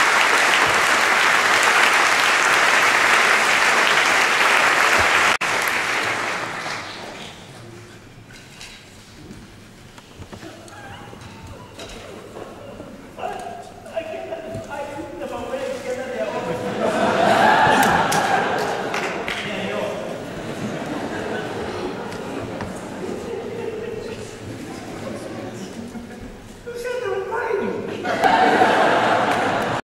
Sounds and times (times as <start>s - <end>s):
Speech: 12.7s - 16.7s, 19.3s - 20.2s, 23.0s - 28.1s
Snicker: 16.5s - 19.3s, 20.3s - 24.6s, 27.8s - 29.8s.